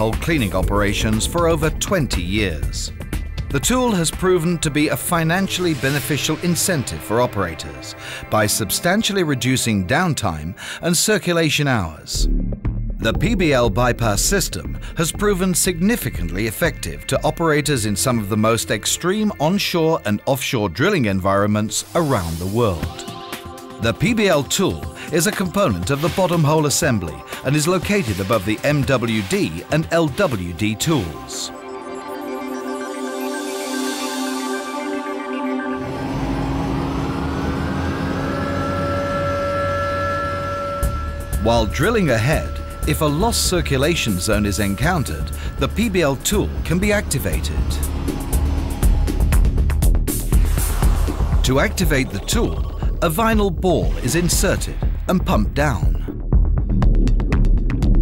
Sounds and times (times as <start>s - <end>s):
Speech: 0.0s - 2.9s, 3.5s - 12.3s, 13.0s - 23.0s, 23.8s - 31.6s, 41.4s - 47.8s, 51.4s - 56.1s
Music: 0.0s - 58.0s.